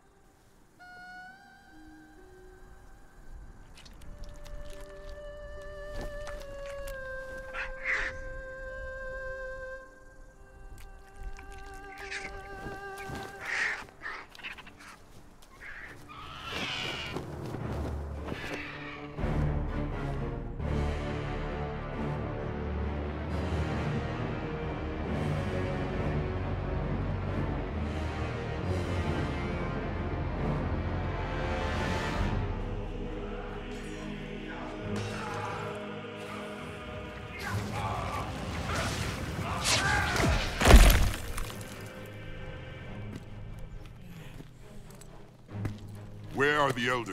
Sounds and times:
Music: 0:00.0 - 0:47.1.

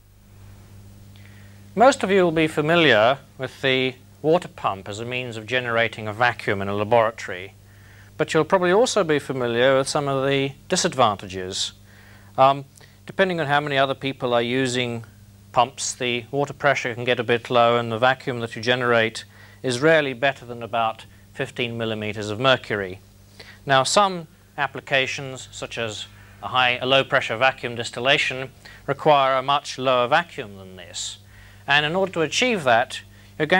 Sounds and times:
Speech: 0:01.8 - 0:07.6, 0:08.2 - 0:11.8, 0:12.4 - 0:23.0, 0:23.6 - 0:33.5.

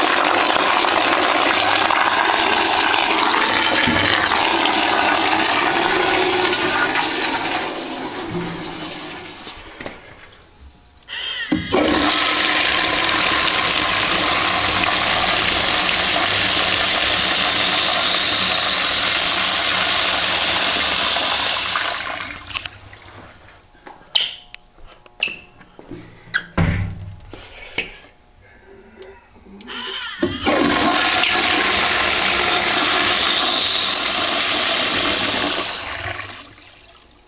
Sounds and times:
Toilet flush: 0:00.0 - 0:10.3, 0:11.5 - 0:22.8, 0:29.8 - 0:37.2.

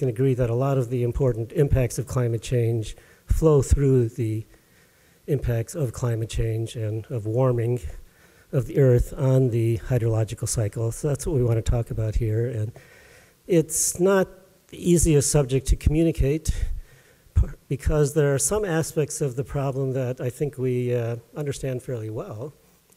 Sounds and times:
Speech: 0:00.0 - 0:04.5, 0:05.3 - 0:12.8, 0:13.5 - 0:16.8, 0:17.4 - 0:22.6.

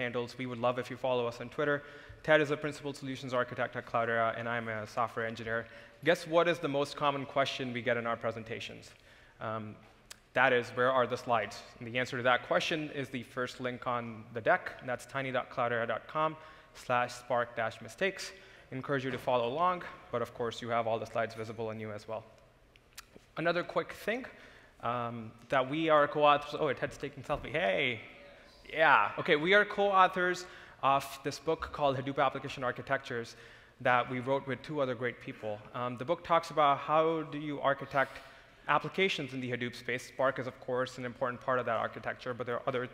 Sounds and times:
Speech: 0:00.0 - 0:22.3, 0:23.4 - 0:42.9.

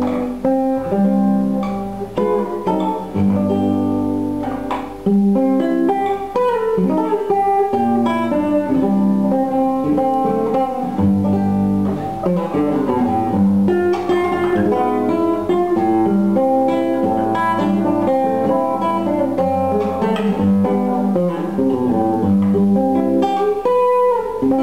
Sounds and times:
Acoustic guitar: 0:00.0 - 0:24.6
Strum: 0:00.0 - 0:24.6.

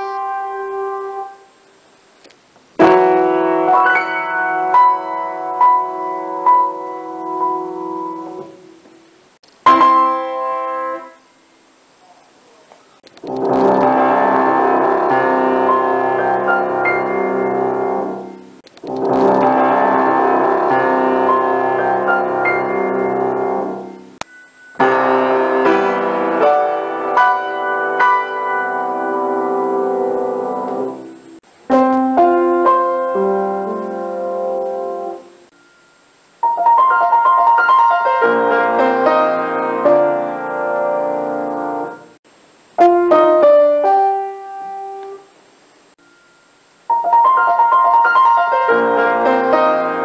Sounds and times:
Music: 0:00.0 - 0:01.5, 0:02.8 - 0:08.9, 0:09.7 - 0:11.3, 0:13.3 - 0:42.2, 0:42.8 - 0:45.3, 0:46.0 - 0:50.0.

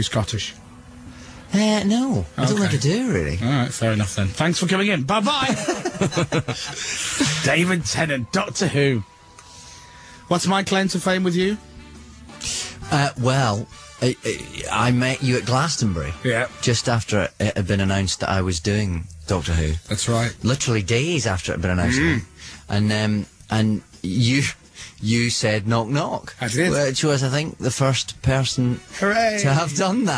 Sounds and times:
Speech: 0:00.0 - 0:00.6, 0:01.5 - 0:05.7, 0:07.2 - 0:09.0, 0:10.3 - 0:11.6, 0:12.9 - 0:30.1
Music: 0:00.0 - 0:30.1.

